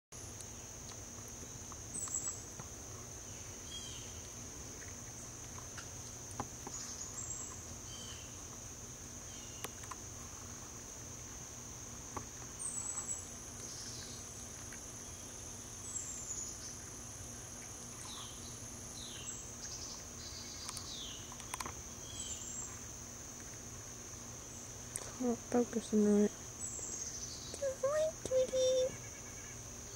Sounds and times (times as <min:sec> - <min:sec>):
Patter: 0:00.2 - 0:29.6
Bird vocalization, bird call, bird song: 0:01.9 - 0:02.4, 0:03.3 - 0:04.3, 0:06.6 - 0:08.4, 0:09.3 - 0:09.8, 0:12.6 - 0:14.3, 0:15.0 - 0:16.9, 0:18.0 - 0:22.8, 0:26.6 - 0:27.8.